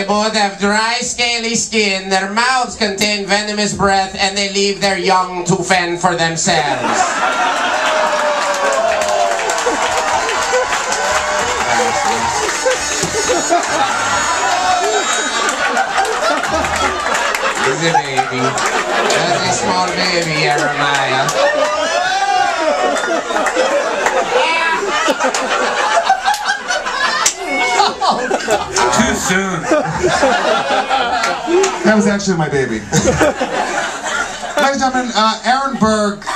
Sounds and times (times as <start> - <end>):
Speech: 0.0 - 7.1, 17.6 - 21.4, 28.8 - 29.7, 31.8 - 33.0, 34.6 - 36.3.